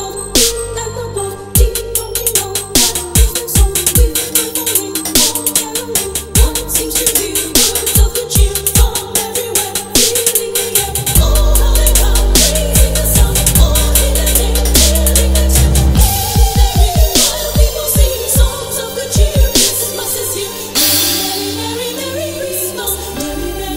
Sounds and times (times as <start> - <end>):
Dubstep: 0.0 - 23.7.